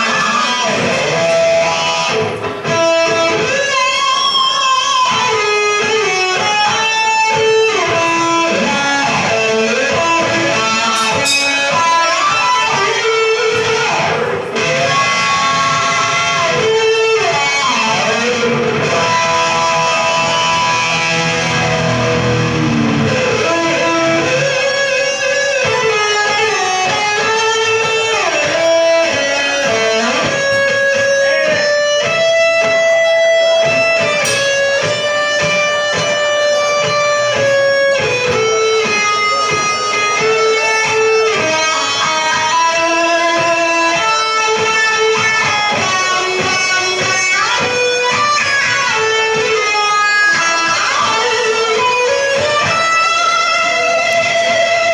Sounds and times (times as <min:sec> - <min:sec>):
Electric guitar: 0:00.0 - 0:54.9.